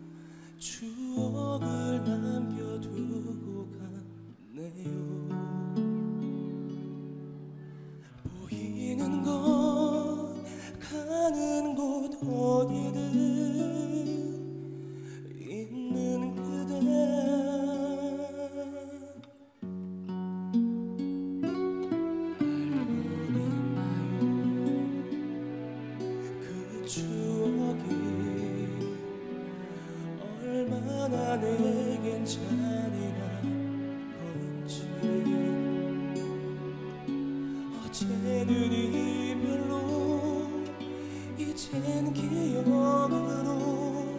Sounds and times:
Music: 0.0s - 44.1s.

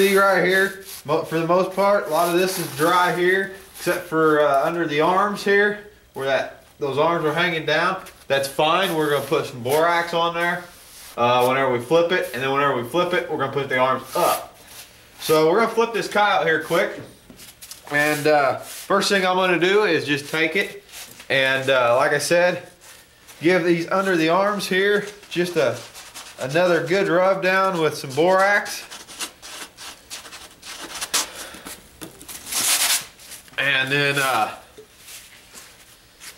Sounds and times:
Speech: 0.0s - 14.5s, 15.2s - 17.1s, 17.9s - 22.7s, 23.4s - 28.9s, 33.6s - 34.7s.

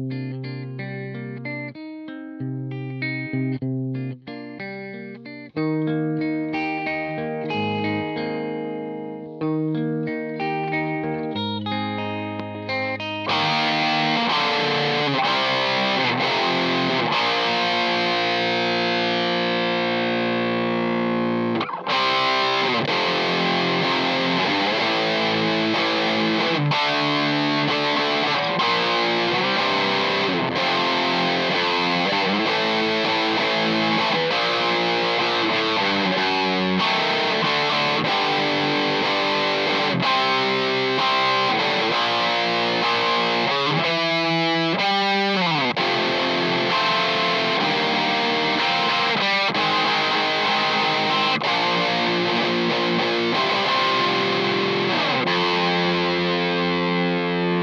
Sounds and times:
Electric guitar: 0.0s - 57.6s
Strum: 0.1s - 57.6s.

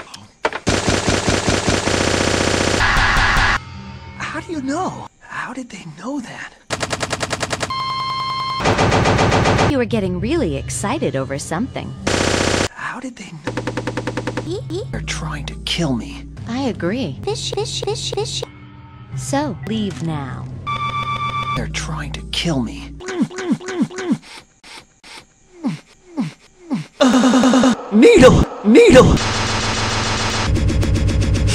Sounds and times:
Music: 3.6s - 5.4s, 9.7s - 12.1s, 13.6s - 23.0s
Speech: 9.7s - 11.9s, 19.2s - 20.5s, 27.9s - 29.2s.

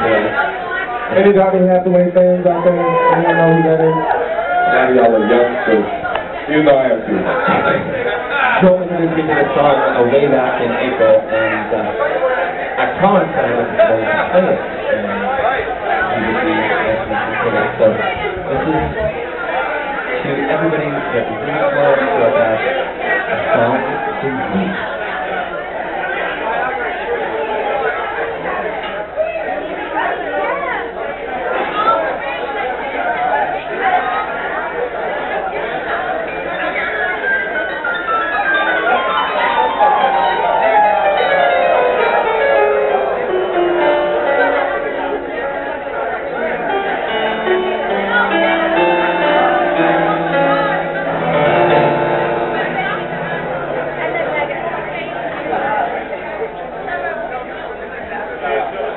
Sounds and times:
Speech: 0.0s - 58.9s.

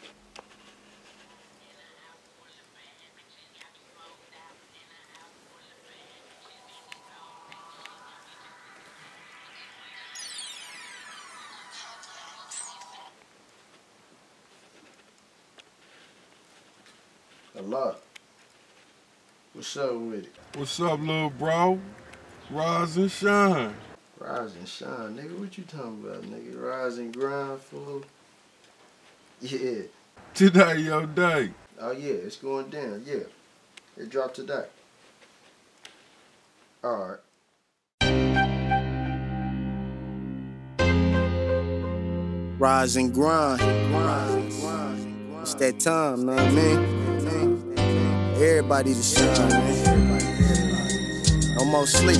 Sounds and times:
Speech: 1.4s - 8.6s, 19.6s - 21.9s, 22.5s - 28.1s, 29.4s - 33.4s, 34.0s - 34.7s, 36.8s - 37.2s, 42.6s - 47.5s, 51.6s - 52.1s.

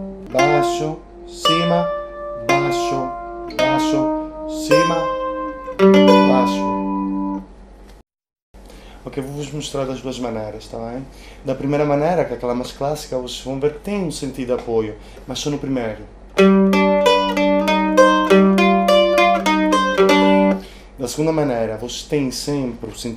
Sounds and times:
Mandolin: 0.0s - 7.4s, 16.4s - 20.6s
Speech: 0.3s - 5.1s, 6.2s - 6.7s, 9.0s - 16.2s, 21.0s - 23.1s.

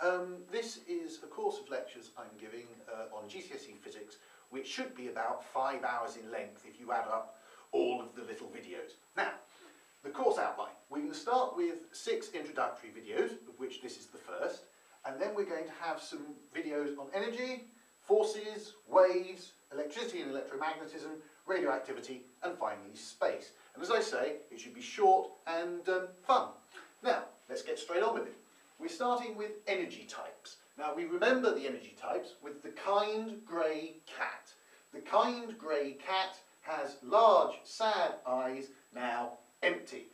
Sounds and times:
Speech: 0.0s - 40.1s.

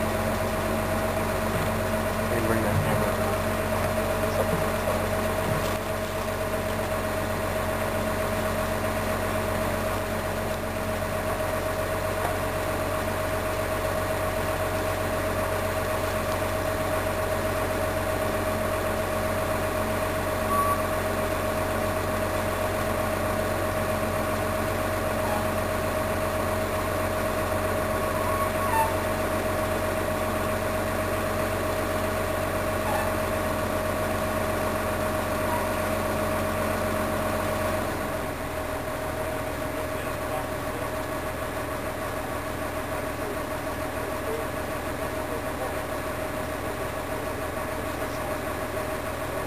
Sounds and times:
Outside, urban or manmade: 0.0s - 49.4s
Vehicle: 0.0s - 49.4s.

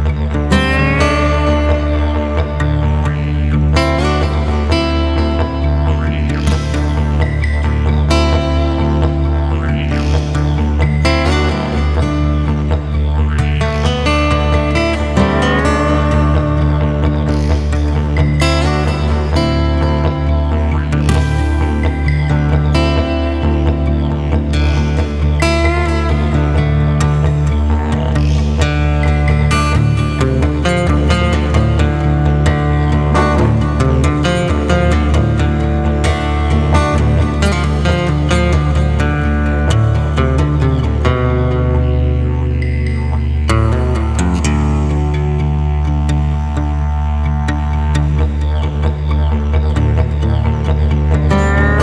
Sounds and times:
Country: 0.0s - 51.8s.

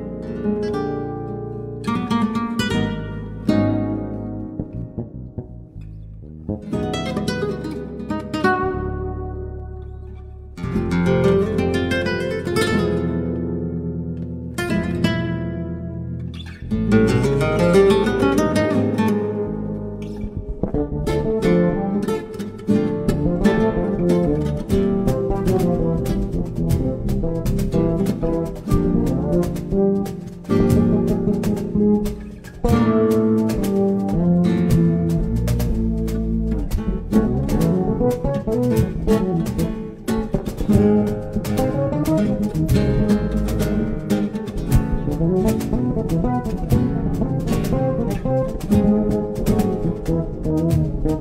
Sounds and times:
Strum: 0.0s - 51.2s.

